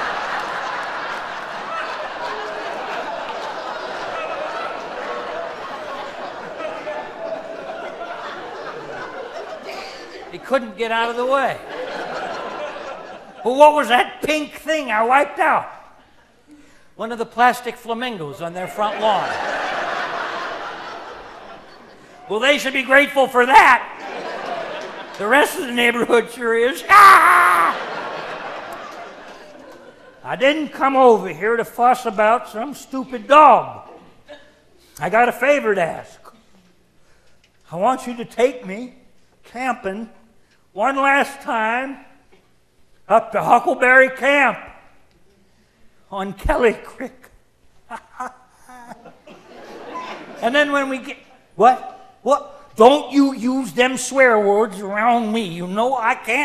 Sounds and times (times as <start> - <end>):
Laughter: 0.0 - 10.4, 11.5 - 13.5, 18.8 - 22.3, 24.0 - 25.9, 27.3 - 30.3, 47.9 - 50.4
Speech: 10.3 - 11.6, 13.4 - 15.8, 17.0 - 19.3, 22.3 - 24.0, 25.2 - 27.7, 30.2 - 33.9, 35.0 - 36.4, 37.7 - 40.2, 40.8 - 42.2, 43.1 - 44.8, 46.1 - 47.3, 50.4 - 56.4.